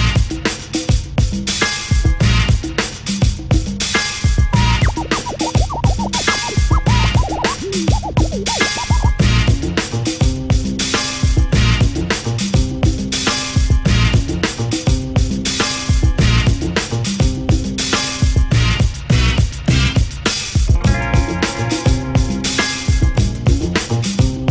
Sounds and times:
Music: 0.0 - 24.5.

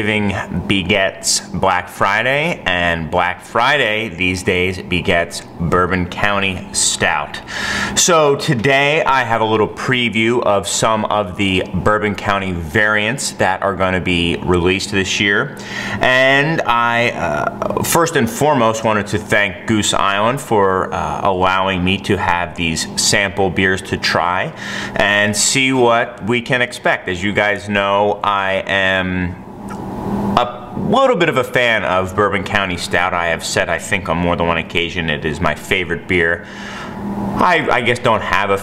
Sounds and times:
Speech: 0.0 - 29.4, 30.4 - 36.5, 37.4 - 38.6.

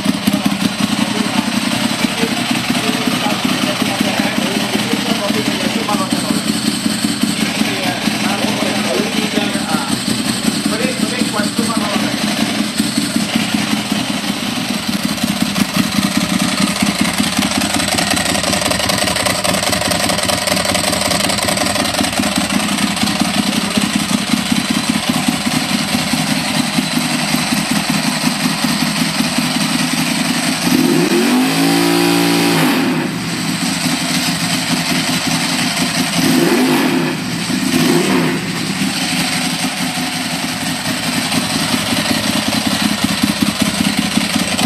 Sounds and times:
Speech: 0.3 - 6.6, 7.6 - 10.0, 10.6 - 12.5.

